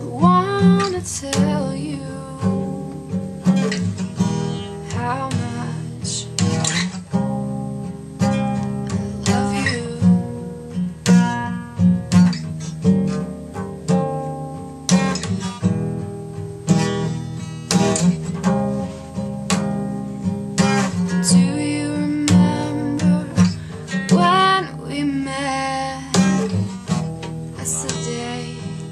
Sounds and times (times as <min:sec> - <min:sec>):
Music: 0:00.0 - 0:28.9.